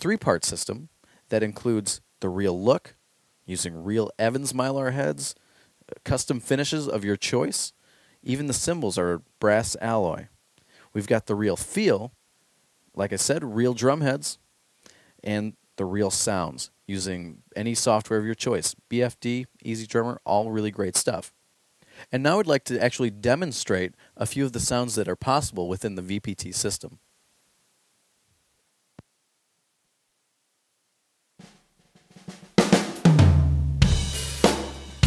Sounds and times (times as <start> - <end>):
Speech: 0.0 - 12.2, 12.9 - 14.4, 15.2 - 21.4, 22.0 - 27.0.